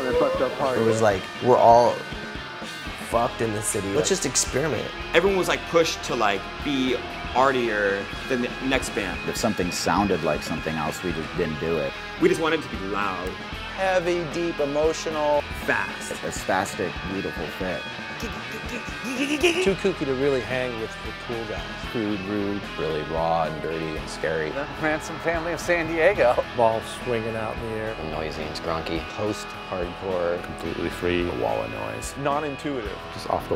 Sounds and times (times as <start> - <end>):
Music: 0.0 - 33.5
Speech: 3.1 - 33.5.